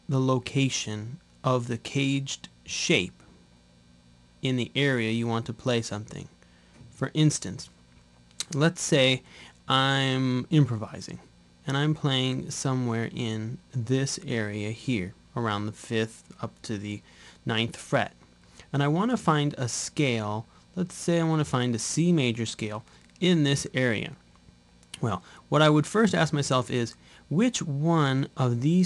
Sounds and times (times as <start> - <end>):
Speech: 0.0 - 3.3, 4.4 - 7.8, 8.4 - 24.2, 25.0 - 28.8.